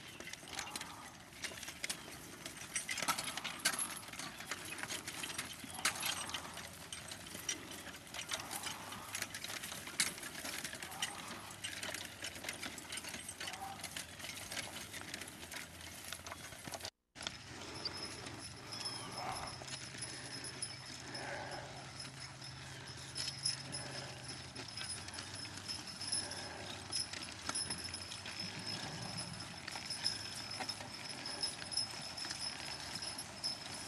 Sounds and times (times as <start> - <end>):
Clip-clop: 0.0 - 33.8.